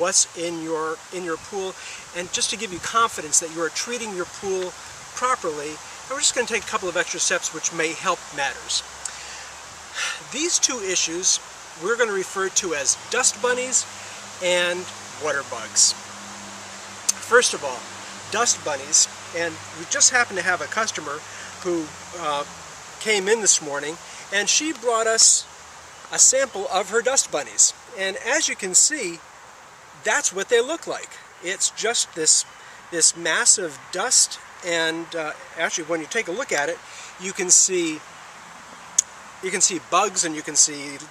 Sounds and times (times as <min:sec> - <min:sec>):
Speech: 0:00.0 - 0:08.8, 0:10.0 - 0:16.0, 0:17.1 - 0:25.5, 0:26.1 - 0:29.2, 0:30.0 - 0:38.0, 0:39.4 - 0:41.1.